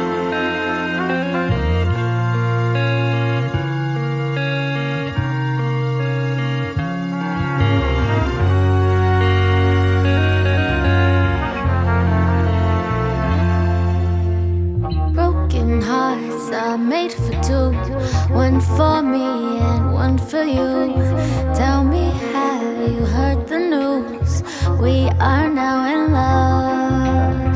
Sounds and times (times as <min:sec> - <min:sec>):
Background music: 0:00.0 - 0:27.5.